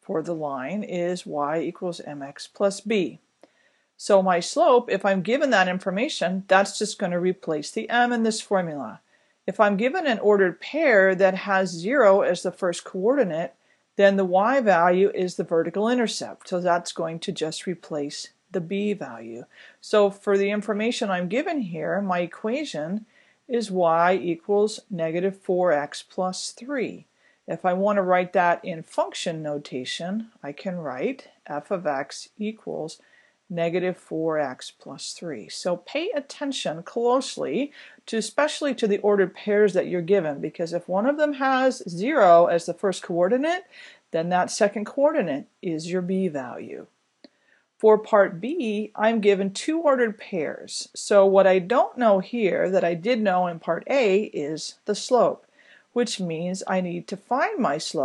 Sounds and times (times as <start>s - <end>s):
Speech: 0.0s - 3.2s, 4.0s - 47.0s, 47.8s - 55.4s, 56.0s - 58.0s.